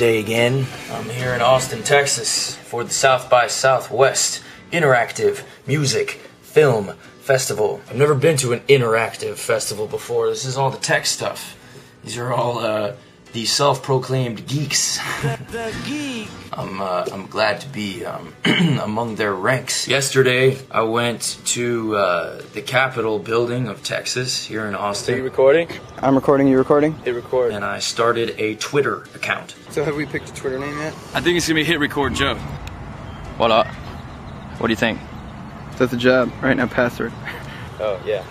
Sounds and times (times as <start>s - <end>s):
Speech: 0.0s - 11.5s, 12.1s - 32.4s.